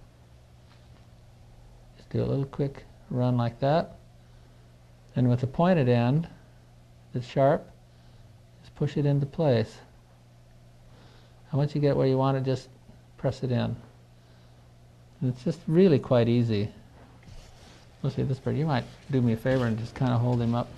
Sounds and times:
Speech: 0:02.0 - 0:04.0, 0:05.1 - 0:06.4, 0:07.1 - 0:07.8, 0:08.6 - 0:09.9, 0:11.5 - 0:13.9, 0:15.2 - 0:16.8, 0:18.0 - 0:20.7.

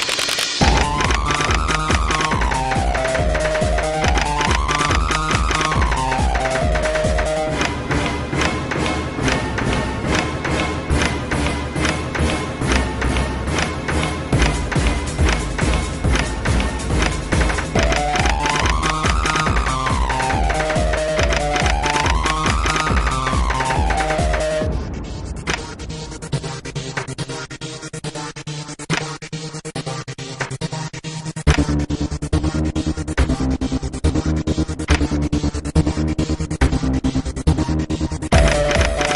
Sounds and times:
Music: 0:00.0 - 0:39.1.

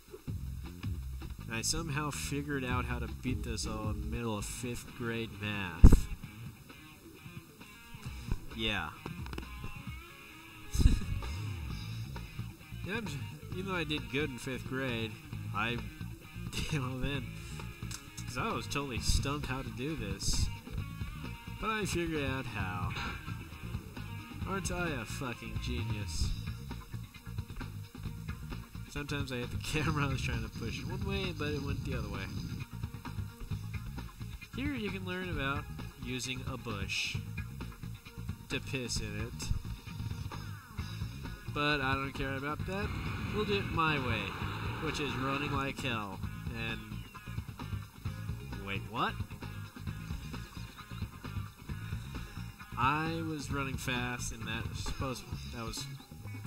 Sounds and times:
Music: 0:00.0 - 0:56.4
Speech: 0:01.5 - 0:06.2, 0:08.5 - 0:09.0, 0:12.9 - 0:15.9, 0:16.5 - 0:17.5, 0:18.2 - 0:20.6, 0:21.6 - 0:23.1, 0:24.4 - 0:26.4, 0:28.9 - 0:32.4, 0:34.6 - 0:37.2, 0:38.5 - 0:39.6, 0:41.5 - 0:47.0, 0:48.5 - 0:49.2, 0:52.8 - 0:56.0.

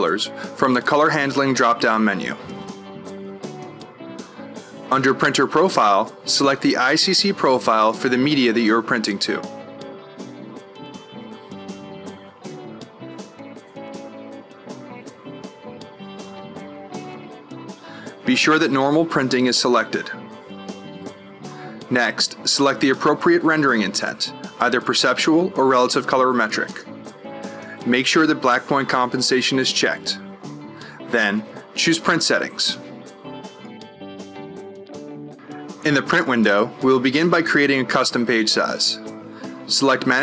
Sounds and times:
Speech: 0:00.0 - 0:02.4, 0:04.9 - 0:09.5, 0:18.2 - 0:20.2, 0:21.9 - 0:26.9, 0:27.8 - 0:30.2, 0:31.1 - 0:32.8, 0:35.8 - 0:39.0, 0:39.7 - 0:40.2
Music: 0:00.0 - 0:40.2.

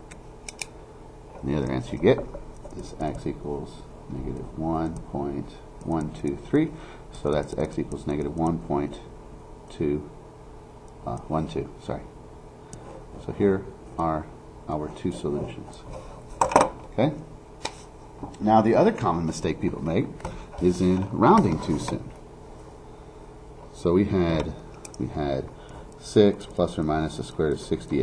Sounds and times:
Speech: 0:01.4 - 0:09.1, 0:09.7 - 0:10.1, 0:11.0 - 0:12.1, 0:13.2 - 0:15.9, 0:16.9 - 0:17.3, 0:18.4 - 0:22.2, 0:23.7 - 0:28.0.

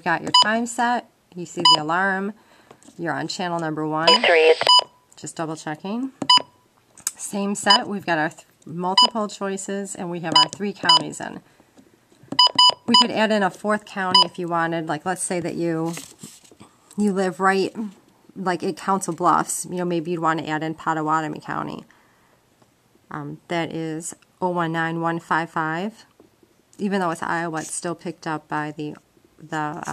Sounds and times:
Inside, small room: 0:00.0 - 0:29.9
Speech: 0:03.0 - 0:06.2, 0:07.1 - 0:11.4, 0:12.9 - 0:16.0, 0:17.0 - 0:21.9, 0:23.1 - 0:26.1, 0:26.8 - 0:29.9.

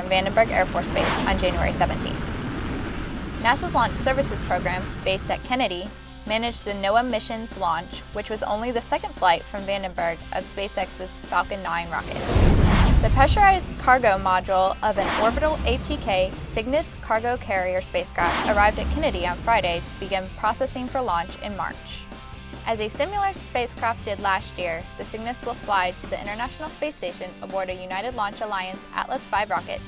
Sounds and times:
Speech: 0:00.0 - 0:02.2, 0:03.4 - 0:12.2, 0:13.1 - 0:22.0, 0:22.7 - 0:29.8
Music: 0:00.0 - 0:29.8.

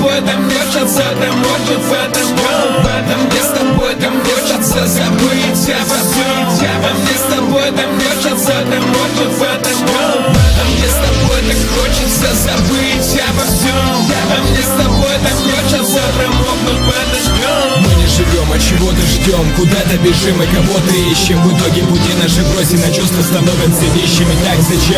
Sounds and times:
Music: 0:00.0 - 0:24.9.

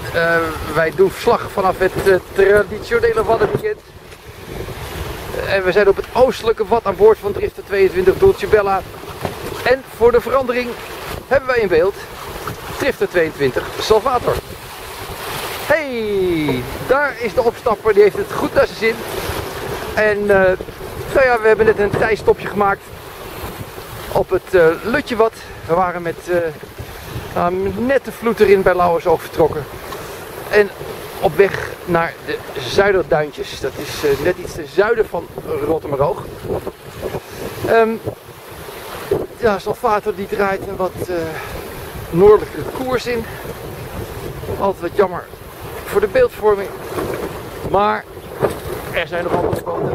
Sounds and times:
Wind noise (microphone): 0:00.0 - 0:31.9, 0:32.5 - 0:49.9
Sailboat, sailing ship: 0:00.0 - 0:49.9
Waves, surf: 0:00.0 - 0:49.9.

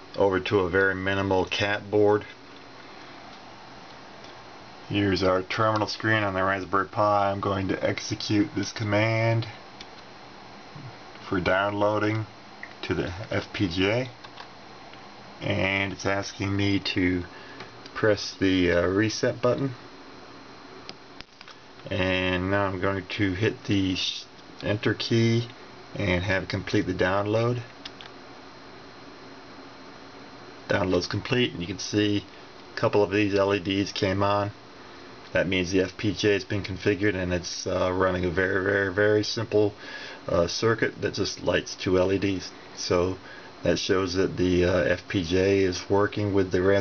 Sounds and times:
Speech: 0:00.2 - 0:02.4, 0:04.9 - 0:09.6, 0:10.8 - 0:14.2, 0:15.4 - 0:17.3, 0:18.0 - 0:19.8, 0:21.8 - 0:27.7, 0:30.7 - 0:34.6, 0:35.3 - 0:46.8.

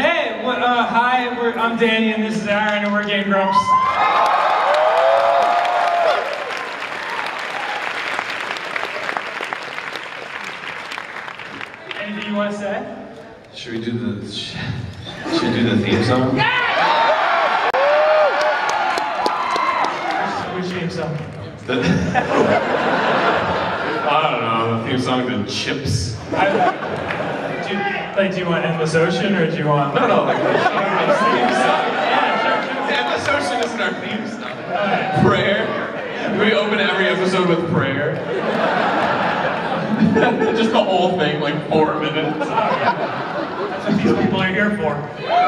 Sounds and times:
Speech: 0:00.0 - 0:03.7, 0:11.9 - 0:16.5, 0:20.2 - 0:22.1, 0:24.0 - 0:26.2, 0:27.6 - 0:31.9, 0:32.8 - 0:38.2, 0:40.0 - 0:42.9, 0:43.8 - 0:45.2.

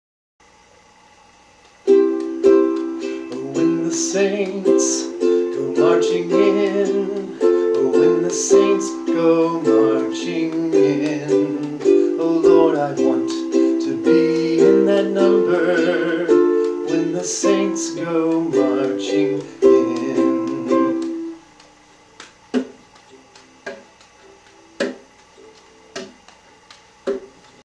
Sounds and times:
Inside, small room: 0:00.4 - 0:27.6
Ukulele: 0:01.8 - 0:27.6
Singing: 0:03.2 - 0:21.4.

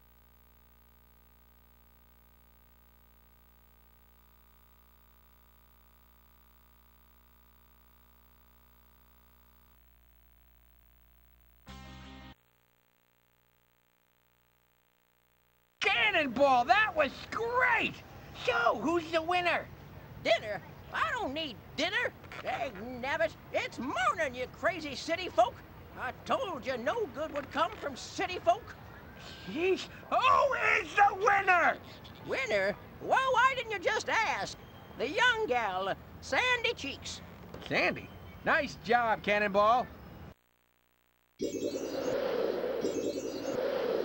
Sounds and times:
Speech: 0:15.8 - 0:28.8, 0:29.4 - 0:40.0.

